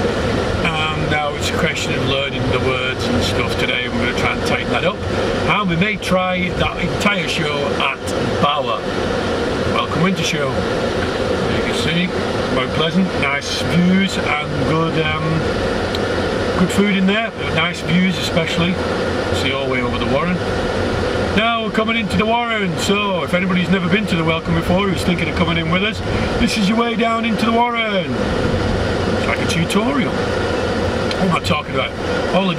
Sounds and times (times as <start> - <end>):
Outside, urban or manmade: 0.0 - 32.5
Speech: 0.6 - 8.8, 9.8 - 10.6, 11.4 - 15.5, 16.6 - 18.8, 19.4 - 20.4, 21.4 - 28.2, 29.2 - 30.2, 31.2 - 32.5.